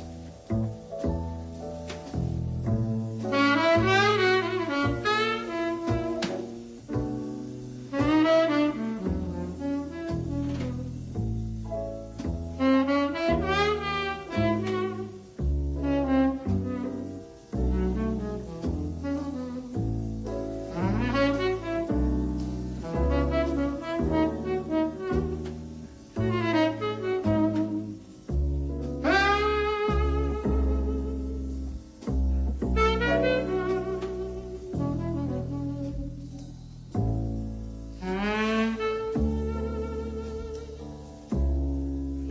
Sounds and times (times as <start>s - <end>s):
Brass instrument: 0.0s - 42.3s
Saxophone: 3.3s - 6.5s, 7.9s - 11.0s, 12.6s - 28.3s, 29.0s - 31.8s, 32.5s - 36.5s, 37.9s - 41.5s.